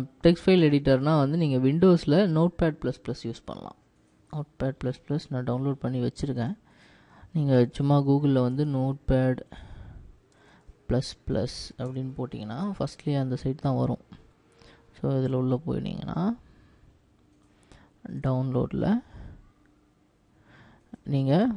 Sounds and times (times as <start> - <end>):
Speech: 0.0 - 6.6, 7.3 - 9.5, 10.9 - 14.2, 14.9 - 16.4, 18.0 - 19.2, 21.0 - 21.5.